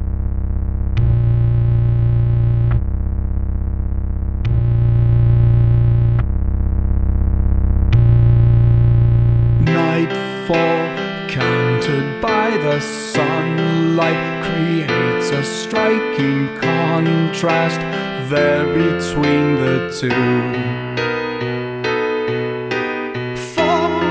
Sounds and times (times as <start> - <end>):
Happy music: 9.6 - 24.1.